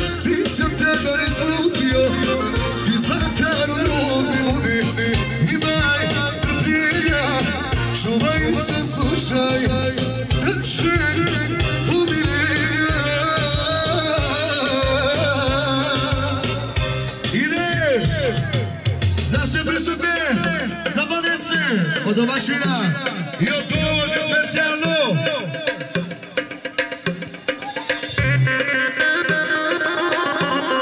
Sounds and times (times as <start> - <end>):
Music: 0.0 - 30.8
Speech: 17.3 - 25.6.